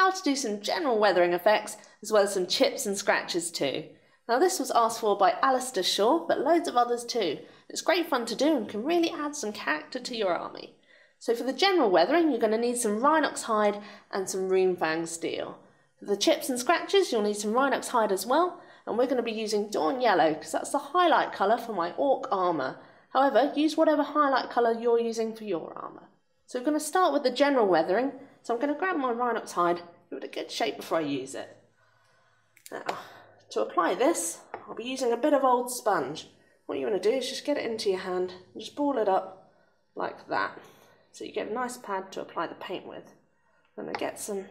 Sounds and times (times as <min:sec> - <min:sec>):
Speech: 0:00.0 - 0:31.5, 0:32.7 - 0:39.3, 0:40.0 - 0:40.6, 0:41.2 - 0:43.0, 0:43.8 - 0:44.5.